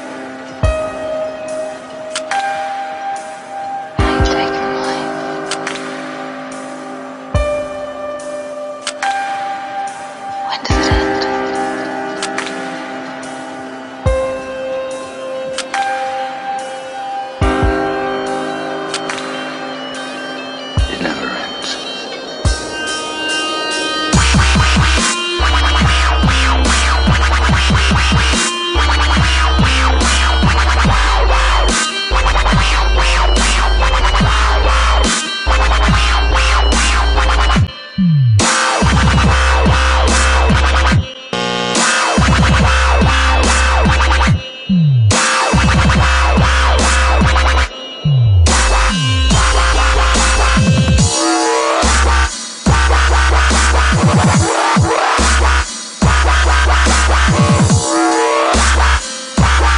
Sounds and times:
Dubstep: 0.0s - 59.7s.

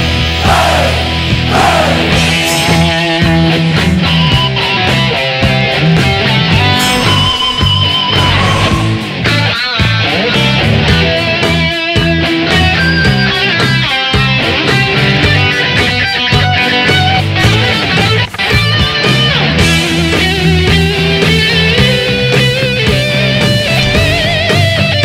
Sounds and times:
Music: 0.0s - 25.0s.

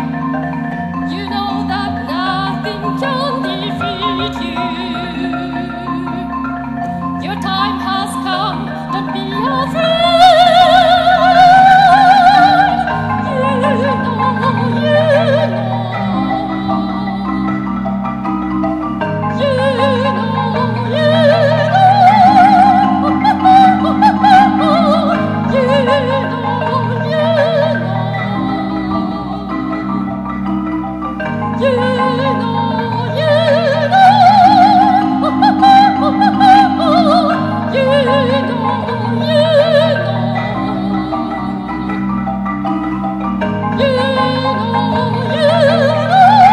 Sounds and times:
Marimba, xylophone: 0.0s - 46.5s.

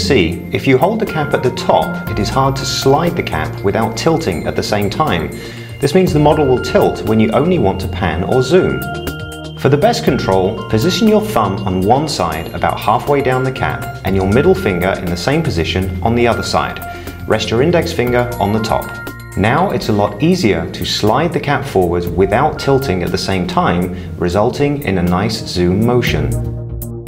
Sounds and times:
Speech: 0.0s - 8.9s, 9.6s - 26.4s
Music: 0.0s - 27.0s.

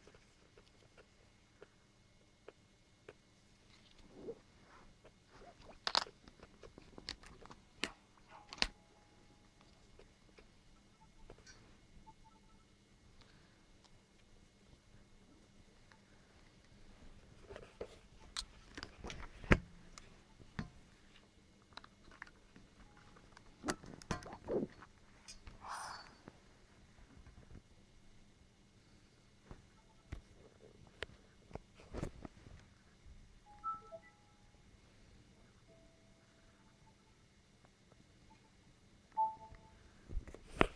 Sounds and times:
Inside, small room: 0.0s - 40.7s.

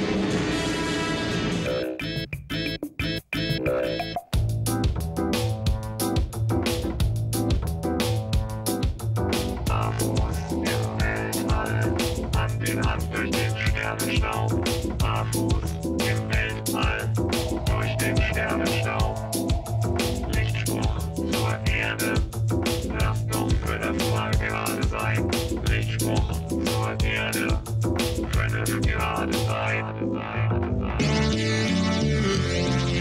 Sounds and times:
Music: 0.0s - 33.0s.

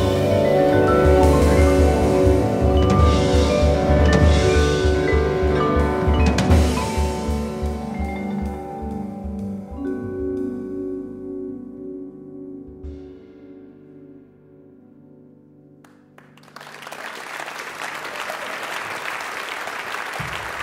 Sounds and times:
Classical music: 0.0s - 16.7s.

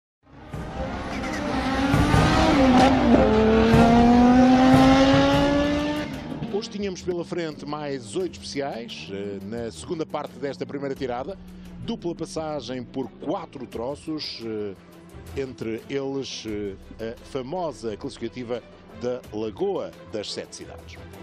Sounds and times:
Music: 0.2s - 21.2s
Tire squeal: 1.1s - 1.6s
Speech: 6.4s - 14.8s, 15.4s - 21.0s.

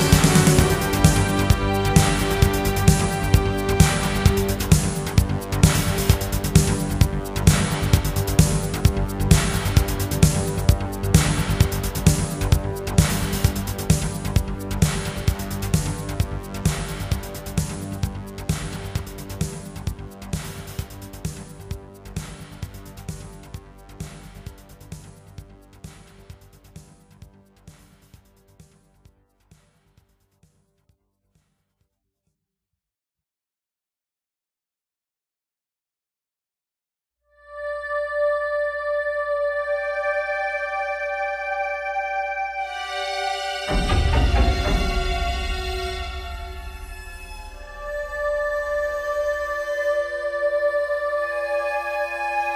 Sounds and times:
Music: 0.0s - 31.9s, 37.3s - 52.5s.

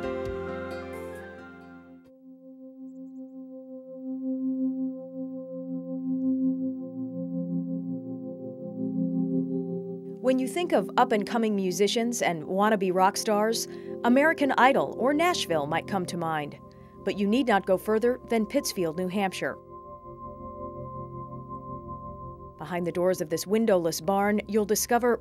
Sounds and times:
Music: 0.0s - 25.2s
Speech: 10.2s - 19.6s, 22.6s - 25.2s.

